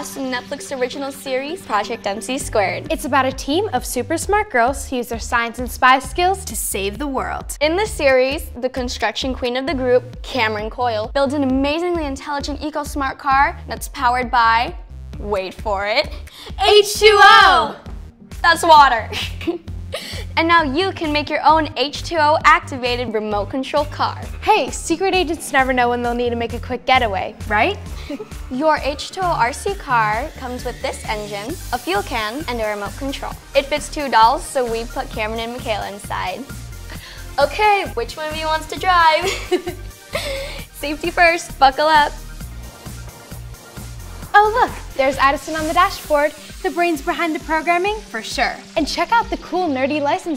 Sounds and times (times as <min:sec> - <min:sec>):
Speech: 0:00.0 - 0:17.8, 0:18.4 - 0:19.2, 0:20.4 - 0:27.8, 0:28.6 - 0:36.4, 0:37.4 - 0:39.3, 0:40.8 - 0:42.2, 0:44.4 - 0:50.3
Music: 0:00.0 - 0:50.3.